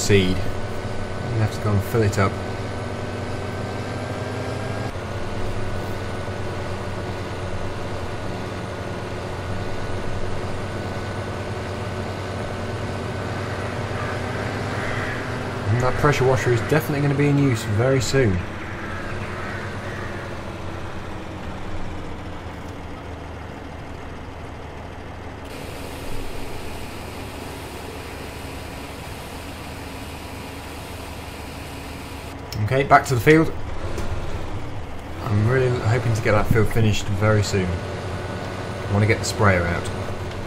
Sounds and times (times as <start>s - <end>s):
Speech: 0.0s - 0.5s, 1.2s - 2.4s, 15.7s - 18.5s, 32.6s - 33.6s, 35.2s - 37.8s, 38.9s - 40.0s
Outside, urban or manmade: 0.0s - 40.4s
Vehicle: 0.0s - 40.4s.